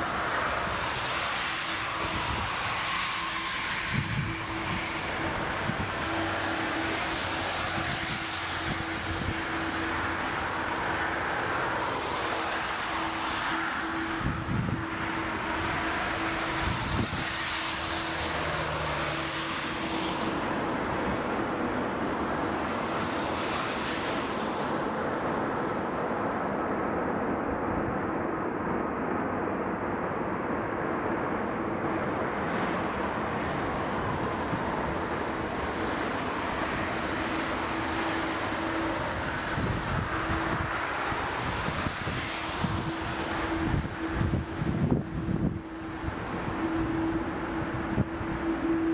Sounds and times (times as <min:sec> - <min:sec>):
Fixed-wing aircraft, airplane: 0:00.0 - 0:48.9
Wind: 0:00.0 - 0:48.9.